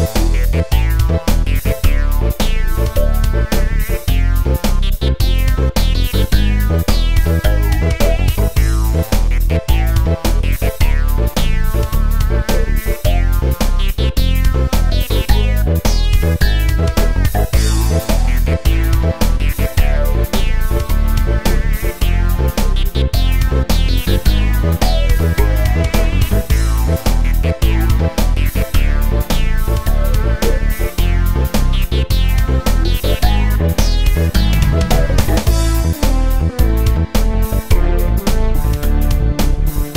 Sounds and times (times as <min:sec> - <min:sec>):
Video game music: 0:00.0 - 0:39.9.